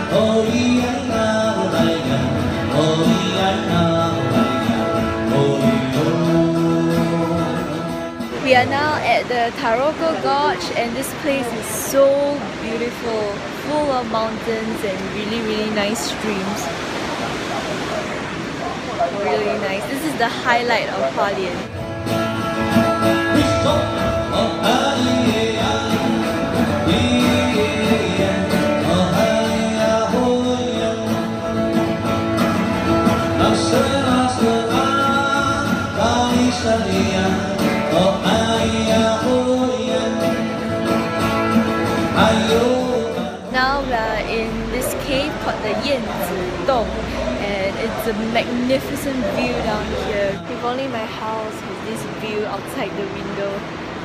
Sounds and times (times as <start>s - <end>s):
Vocal music: 0.0s - 16.7s, 19.1s - 53.7s.